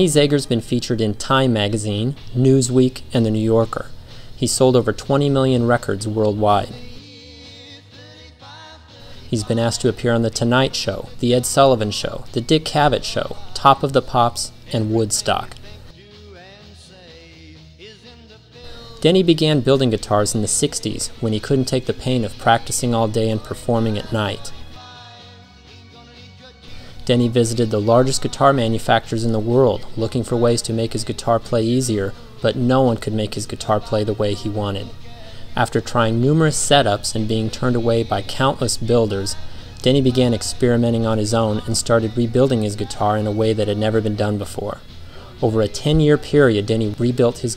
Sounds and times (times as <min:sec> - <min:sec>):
Speech: 0:00.0 - 0:07.0, 0:09.3 - 0:15.8, 0:18.8 - 0:24.6, 0:27.0 - 0:35.0, 0:35.6 - 0:47.5
Music: 0:00.0 - 0:47.5.